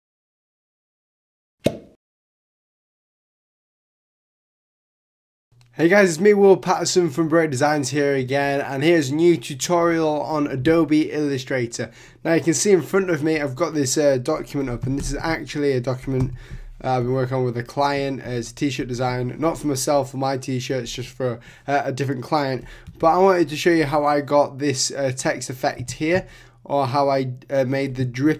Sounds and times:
Speech: 0:05.8 - 0:28.3.

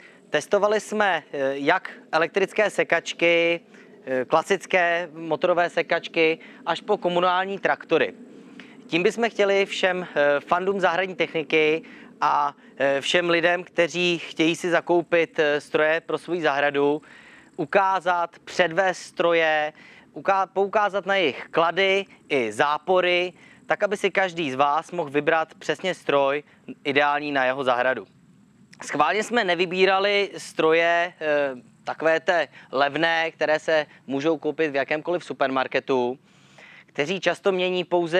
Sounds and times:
Speech: 0:00.3 - 0:08.1, 0:08.9 - 0:17.0, 0:17.6 - 0:28.1, 0:28.8 - 0:36.2, 0:37.0 - 0:38.1.

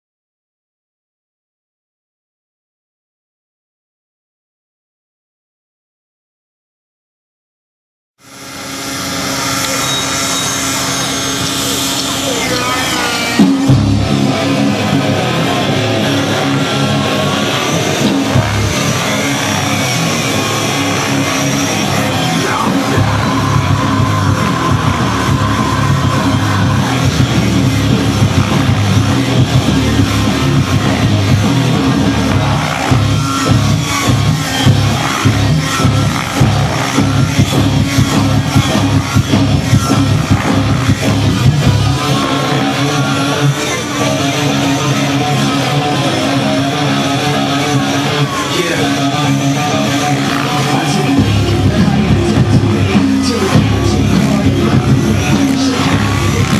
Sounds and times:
Exciting music: 0:11.8 - 0:56.5.

